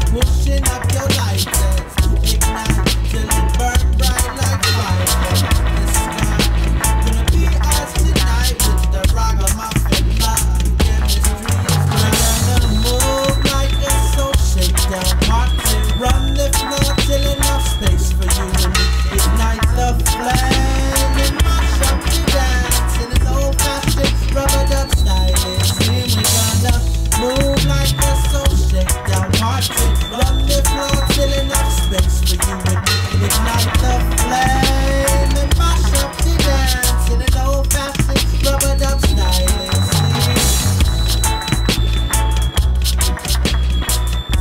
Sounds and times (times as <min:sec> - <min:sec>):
Reggae: 0:00.0 - 0:44.4.